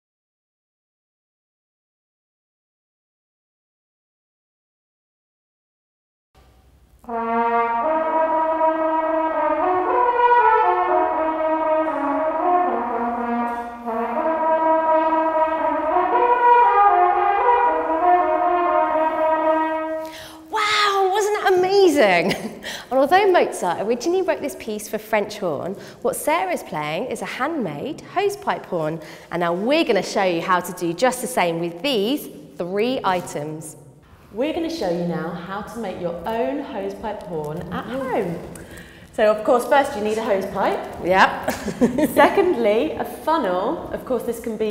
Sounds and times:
Speech: 20.5 - 33.8, 34.4 - 38.5, 39.2 - 41.5, 42.1 - 44.7.

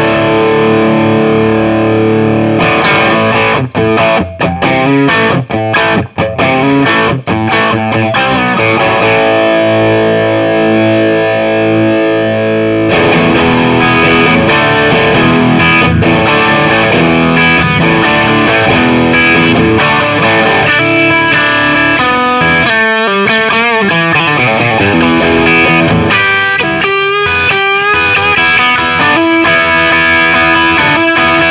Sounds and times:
Effects unit: 0.0 - 31.5
Electric guitar: 0.0 - 31.5
Rock music: 0.0 - 31.5.

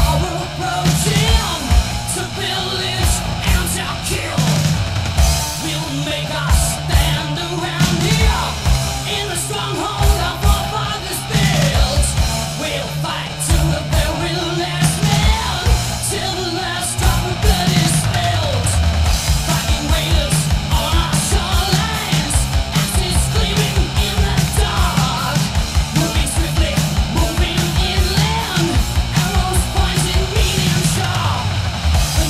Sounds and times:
Music: 0.0 - 32.2.

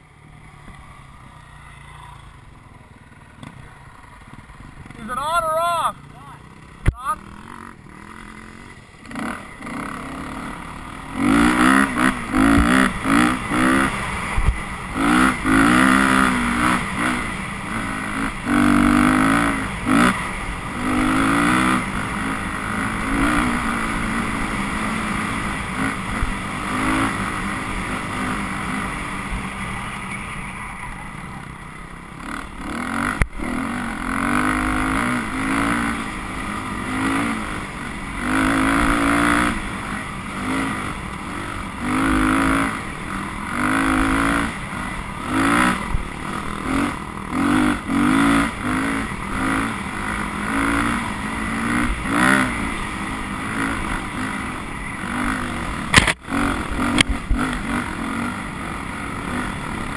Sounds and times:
Speech: 5.0 - 7.2.

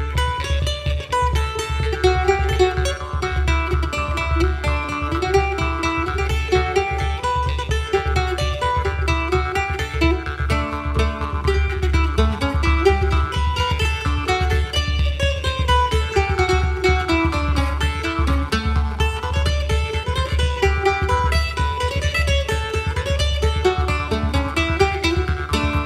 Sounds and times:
Guitar: 1.0 - 25.8.

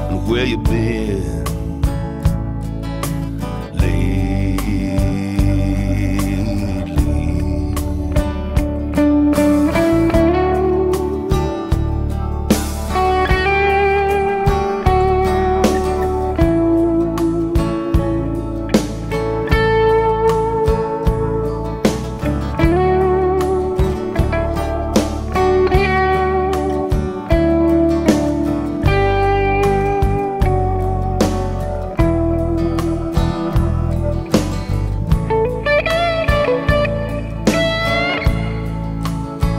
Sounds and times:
Guitar: 0.0 - 39.5.

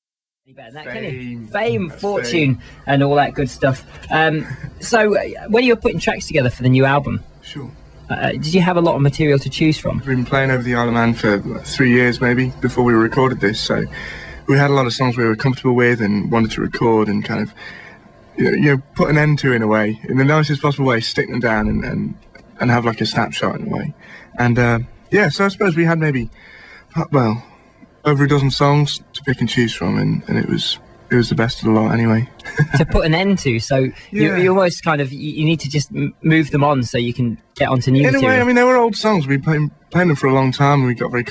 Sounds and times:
Speech: 0.6 - 4.4, 34.1 - 41.3.

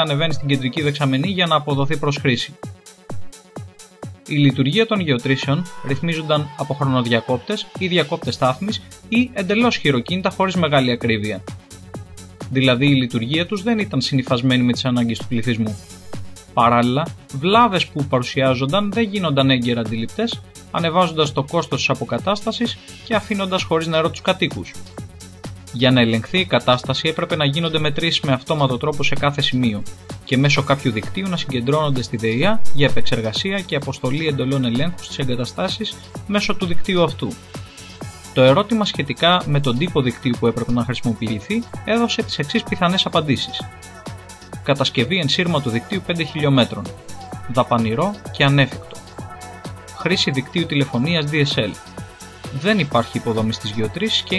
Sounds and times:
Speech: 0.0 - 2.6, 4.3 - 11.4, 12.5 - 15.8, 16.6 - 24.8, 25.8 - 37.4, 38.4 - 43.8, 44.7 - 49.0, 50.0 - 51.8, 52.6 - 54.3
Music: 0.0 - 54.3.

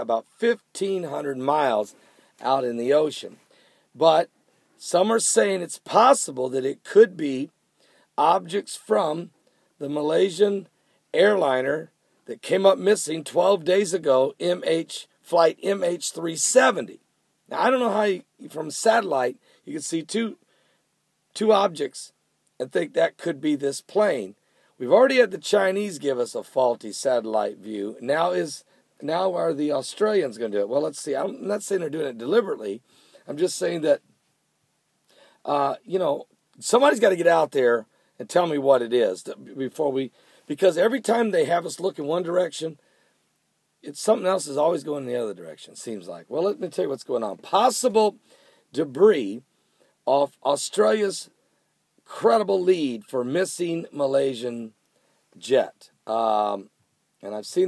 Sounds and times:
Speech: 0.0 - 3.4, 4.0 - 7.5, 8.2 - 20.4, 21.4 - 34.0, 35.5 - 42.8, 43.8 - 49.5, 50.1 - 51.4, 52.0 - 54.8, 55.4 - 57.6.

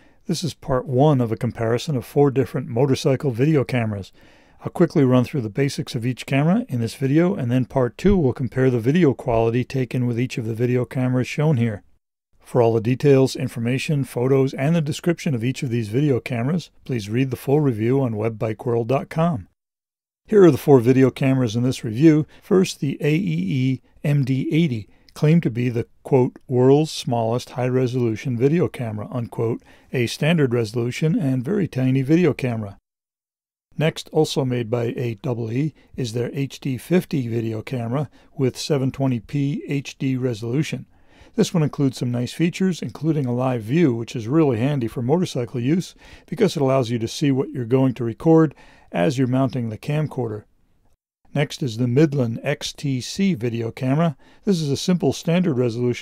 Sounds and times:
Speech: 0.3 - 19.6, 20.3 - 32.8, 33.8 - 50.5, 51.3 - 56.0.

